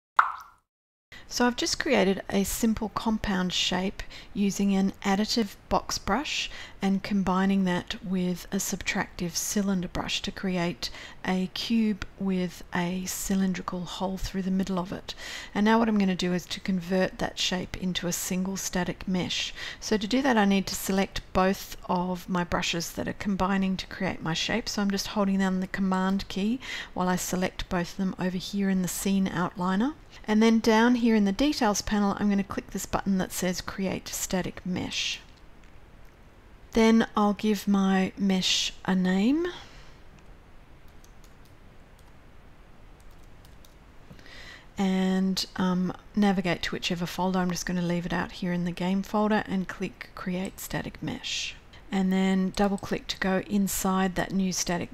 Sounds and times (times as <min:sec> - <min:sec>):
Plop: 0:00.2 - 0:00.6
Speech: 0:01.3 - 0:35.3, 0:36.7 - 0:39.6, 0:44.8 - 0:54.9.